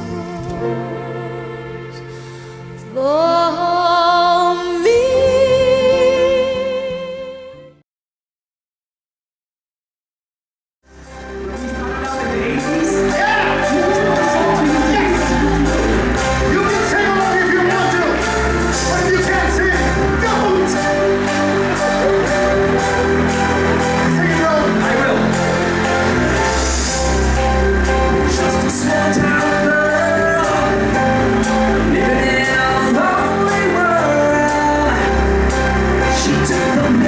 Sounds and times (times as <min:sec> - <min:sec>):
Music: 0:00.0 - 0:07.8, 0:10.8 - 0:37.0.